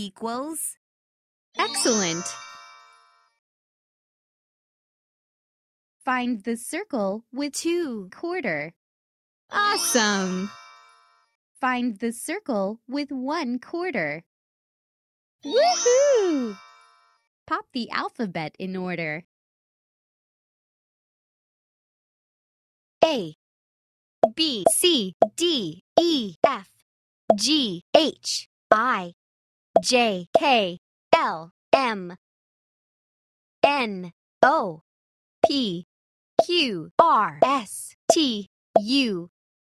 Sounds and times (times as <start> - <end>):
Speech: 0.0 - 0.8, 1.6 - 2.4, 6.0 - 8.8, 9.5 - 10.5, 11.6 - 14.3, 15.5 - 16.6, 17.5 - 19.3, 23.0 - 23.4, 24.3 - 29.2, 29.8 - 32.2, 33.6 - 34.8, 35.4 - 39.3.